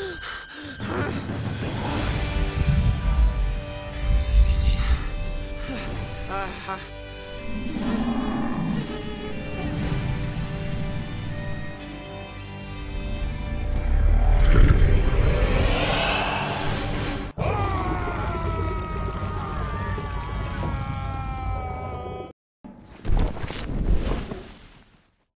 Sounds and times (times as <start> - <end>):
Music: 0.0 - 21.6.